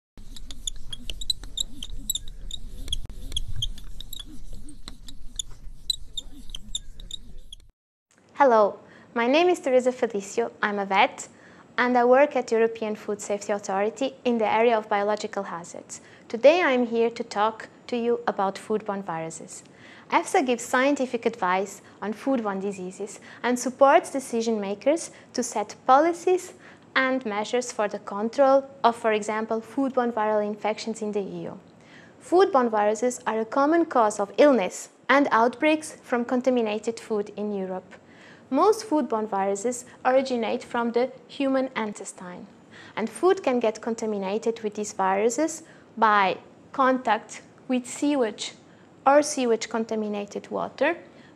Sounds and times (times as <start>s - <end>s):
Inside, small room: 0.2s - 51.3s
Speech: 8.4s - 31.6s, 32.2s - 51.0s.